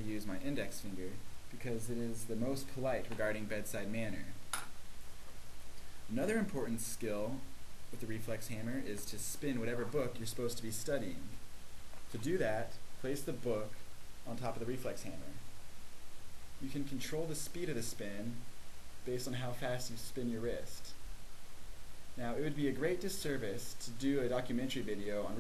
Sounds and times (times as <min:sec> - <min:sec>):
Speech: 0:00.0 - 0:04.4, 0:06.1 - 0:11.4, 0:12.1 - 0:15.4, 0:16.6 - 0:21.0, 0:22.2 - 0:25.4.